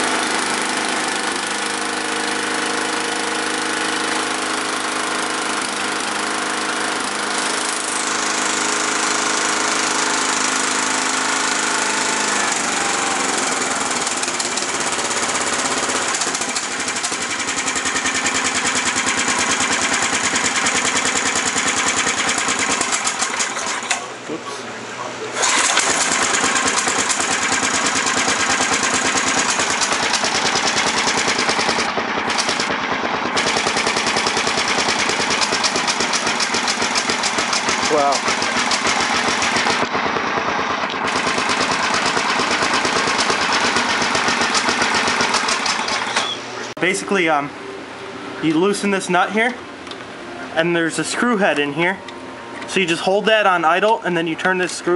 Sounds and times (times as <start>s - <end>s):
Lawn mower: 0.0s - 24.3s, 25.4s - 47.2s.